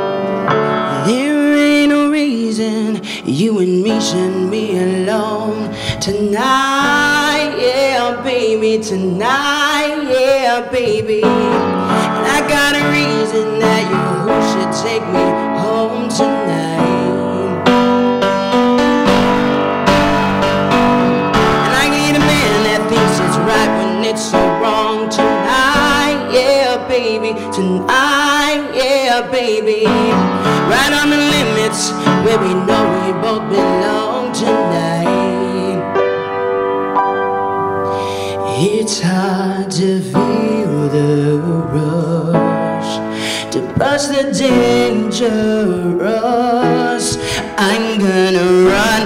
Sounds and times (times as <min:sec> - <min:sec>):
Music: 0:00.0 - 0:49.0
Male singing: 0:00.9 - 0:17.8, 0:21.6 - 0:35.9, 0:38.5 - 0:49.0.